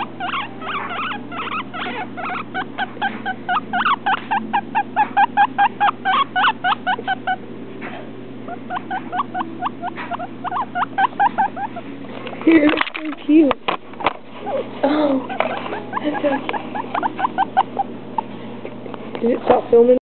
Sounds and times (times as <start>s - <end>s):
Speech: 19.2s - 20.0s.